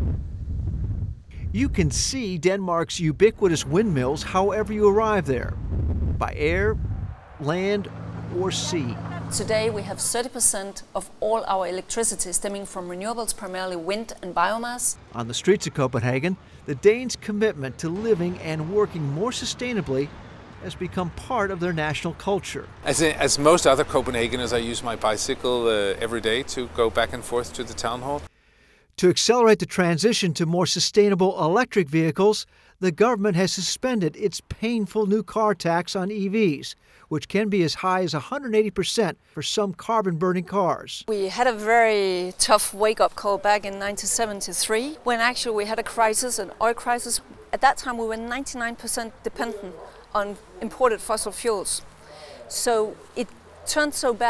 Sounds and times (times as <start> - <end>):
Speech: 1.5 - 5.6, 6.2 - 6.8, 7.4 - 28.3, 29.0 - 51.8, 52.5 - 53.0.